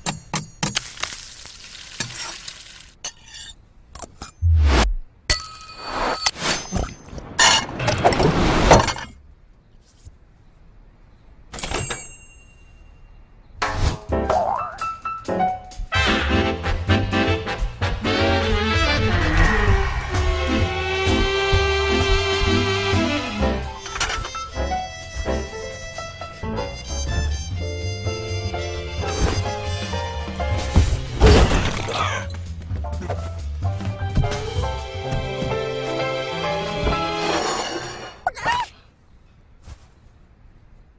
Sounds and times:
Music: 0:13.8 - 0:37.5.

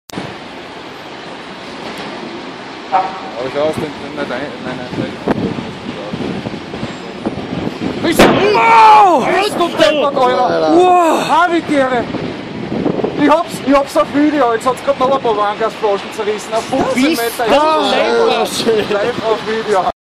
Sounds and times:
Speech: 0:13.2 - 0:20.0.

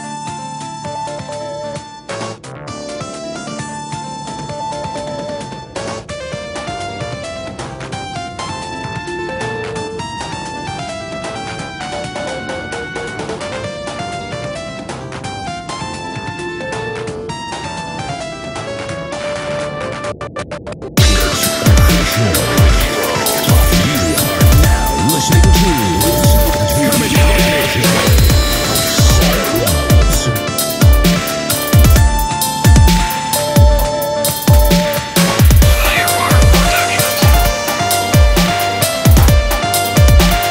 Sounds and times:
Electronica: 0:16.2 - 0:40.5.

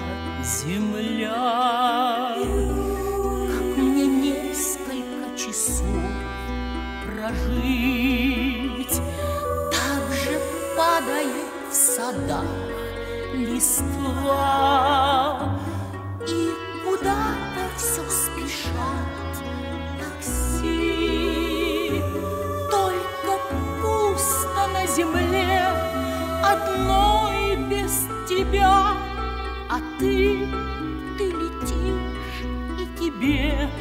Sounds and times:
Sad music: 0:00.0 - 0:33.8.

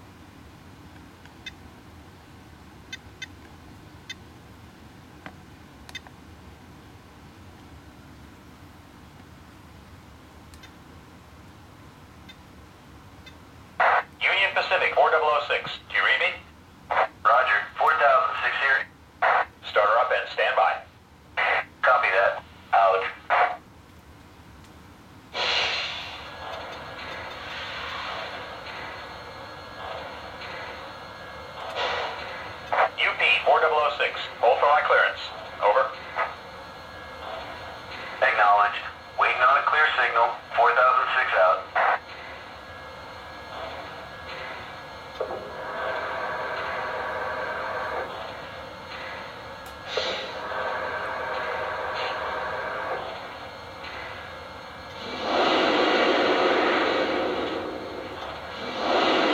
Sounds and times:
Speech: 0:13.9 - 0:23.6, 0:32.8 - 0:36.0, 0:38.2 - 0:41.9.

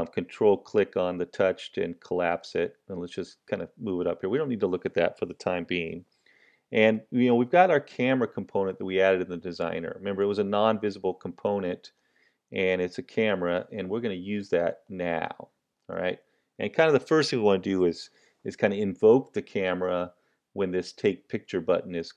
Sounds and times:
Speech: 0:00.0 - 0:06.0, 0:06.7 - 0:22.1.

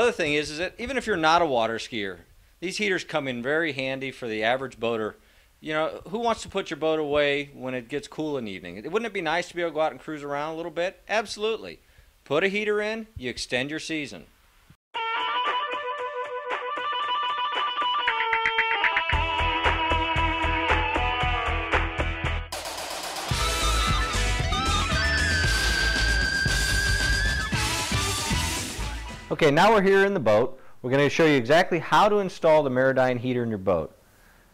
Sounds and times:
Speech: 0:00.0 - 0:14.3, 0:29.3 - 0:34.0.

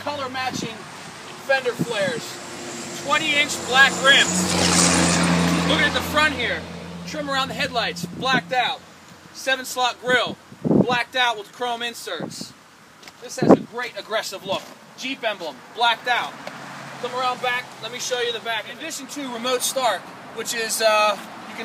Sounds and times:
Speech: 0:00.0 - 0:02.4, 0:03.0 - 0:04.4, 0:05.5 - 0:08.8, 0:09.4 - 0:12.6, 0:13.2 - 0:16.4, 0:17.0 - 0:21.6.

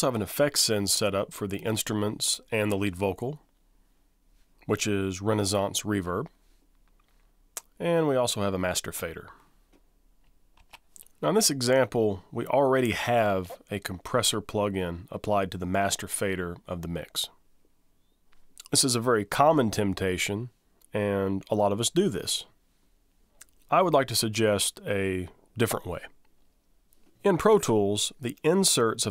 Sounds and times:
Speech: 0:00.0 - 0:03.5, 0:04.7 - 0:06.4, 0:07.6 - 0:09.4, 0:11.2 - 0:17.4, 0:18.6 - 0:22.6, 0:23.7 - 0:26.2, 0:27.2 - 0:29.1.

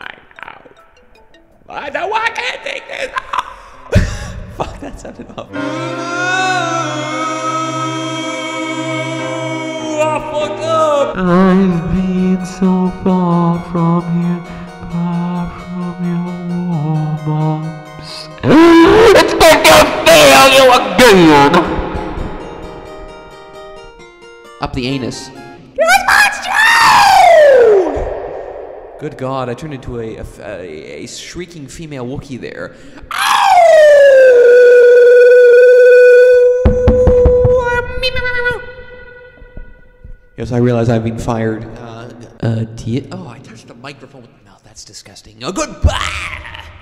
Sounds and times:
Music: 0:00.0 - 0:02.8, 0:03.8 - 0:28.0, 0:36.2 - 0:44.0
Speech: 0:01.7 - 0:03.3, 0:18.1 - 0:21.6, 0:24.6 - 0:26.6, 0:29.0 - 0:32.7, 0:40.4 - 0:46.7.

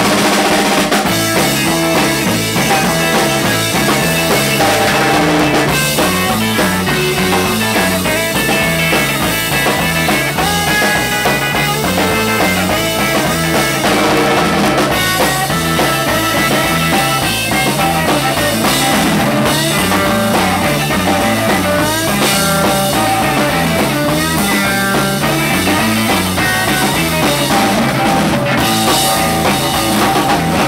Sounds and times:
Music: 0:00.0 - 0:30.6.

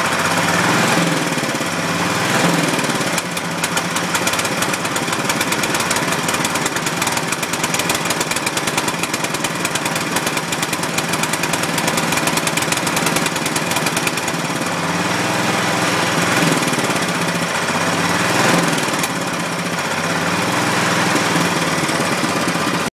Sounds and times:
Accelerating, revving, vroom: 0:00.5 - 0:03.3, 0:15.2 - 0:17.0, 0:18.2 - 0:19.2.

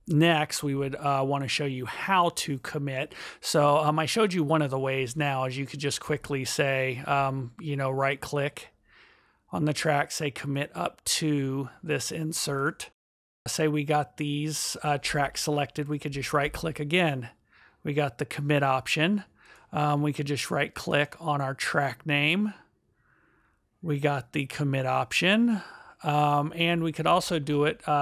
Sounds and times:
Speech: 0:00.0 - 0:08.7, 0:09.5 - 0:22.7, 0:23.8 - 0:28.0.

